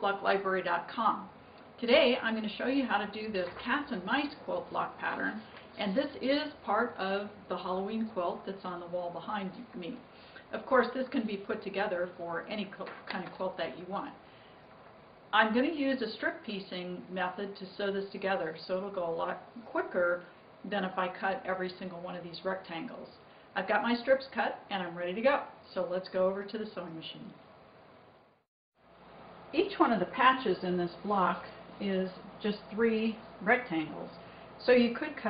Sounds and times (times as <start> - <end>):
Speech: 0.0 - 14.2, 15.4 - 27.4, 29.6 - 35.3.